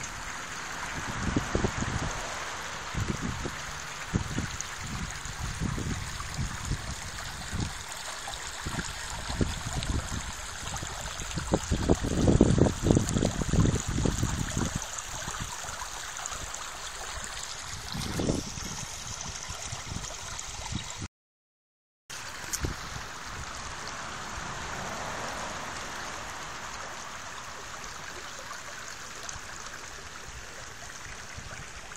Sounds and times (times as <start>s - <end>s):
Stream: 0.0s - 21.1s, 22.1s - 31.9s.